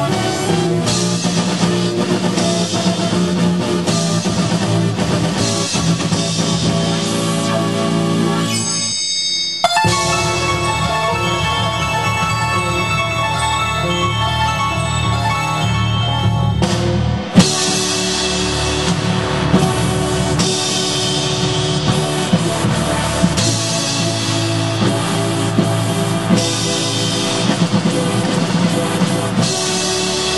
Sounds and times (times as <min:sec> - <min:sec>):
Sound effect: 0:08.4 - 0:17.5
Synthesizer: 0:09.7 - 0:30.3.